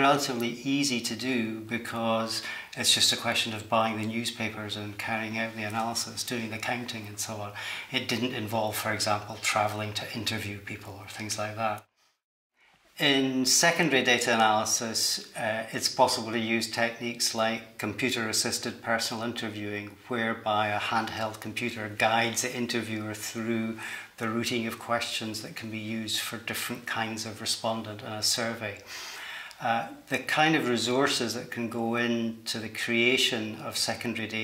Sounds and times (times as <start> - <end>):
Speech: 0.0 - 11.9, 13.0 - 34.4.